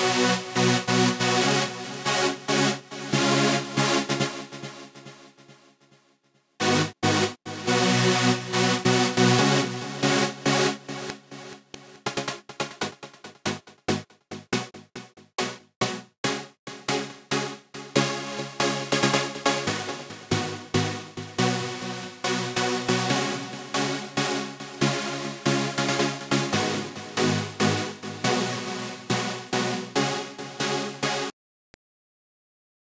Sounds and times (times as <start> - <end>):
Music: 0.0 - 31.3.